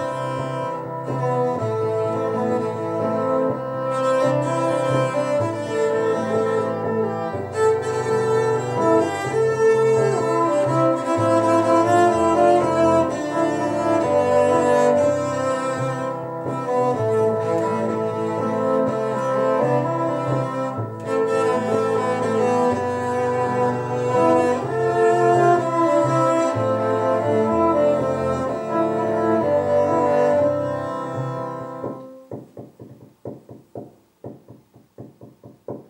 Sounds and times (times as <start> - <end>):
String section: 0.0 - 32.4
Cello: 0.0 - 35.8.